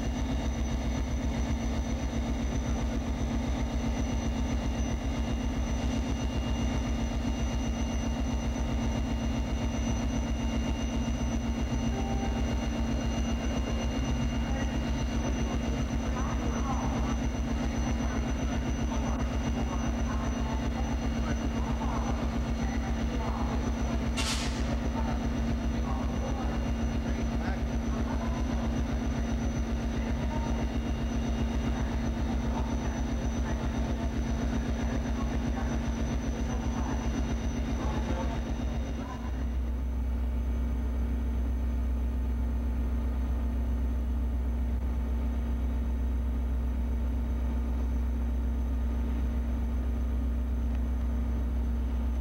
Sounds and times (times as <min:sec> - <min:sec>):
Train: 0:11.9 - 0:12.7, 0:21.6 - 0:29.2
Speech: 0:13.6 - 0:39.6.